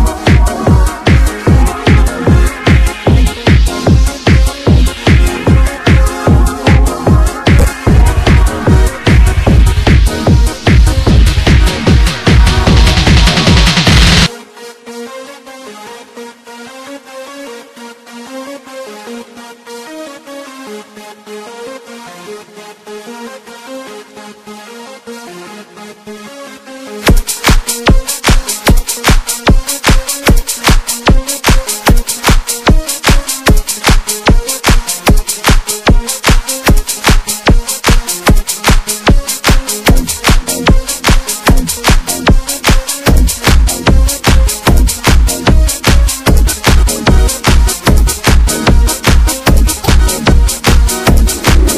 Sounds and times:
Dance music: 0:00.0 - 0:51.7
House music: 0:00.0 - 0:51.7.

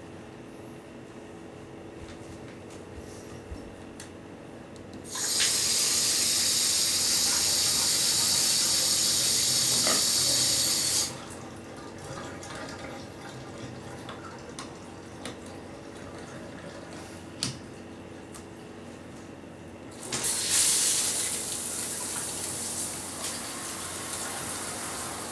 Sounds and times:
Sink (filling or washing): 0:05.1 - 0:17.0, 0:20.0 - 0:25.3
Water tap, faucet: 0:05.1 - 0:17.0, 0:20.0 - 0:25.3
Water: 0:11.2 - 0:17.1.

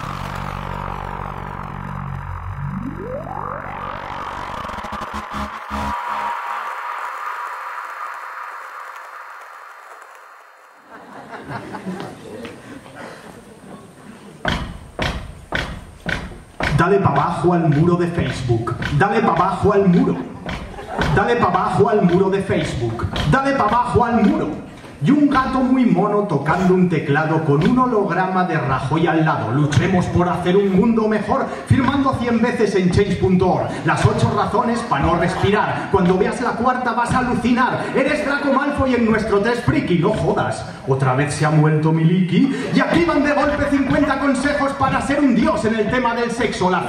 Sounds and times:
Speech: 0:16.7 - 0:20.4, 0:21.0 - 0:46.8.

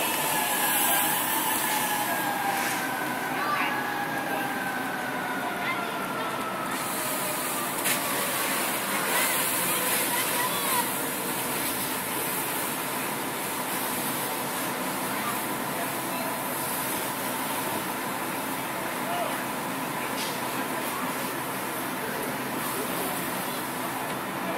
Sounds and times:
Eruption: 0:06.7 - 0:24.5.

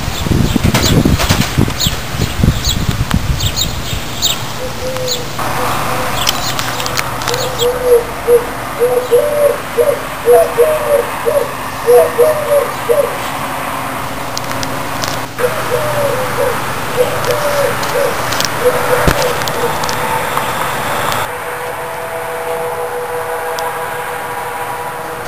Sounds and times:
Coo: 0:07.3 - 0:13.1, 0:15.4 - 0:19.8.

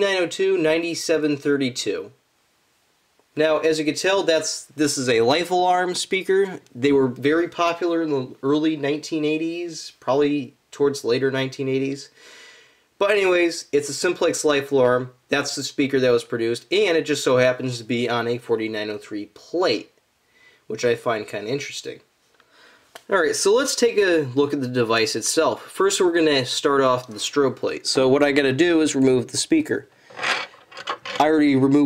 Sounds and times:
Speech: 0:00.0 - 0:02.2, 0:03.4 - 0:12.2, 0:13.0 - 0:20.0, 0:20.7 - 0:22.1, 0:23.0 - 0:29.9, 0:31.2 - 0:31.8.

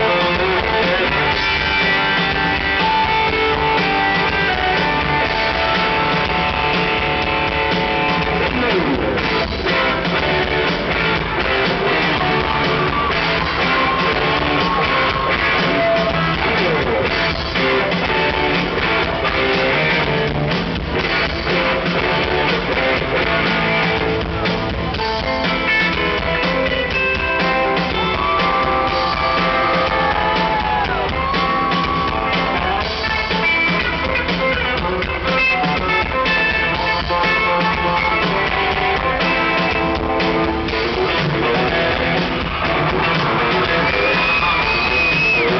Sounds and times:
Electric guitar: 0:00.0 - 0:45.5.

